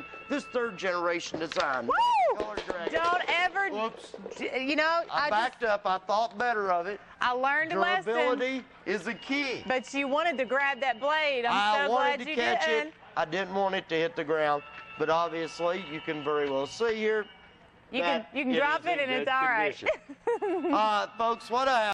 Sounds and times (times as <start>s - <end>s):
Music: 0.0s - 3.7s, 8.6s - 21.9s.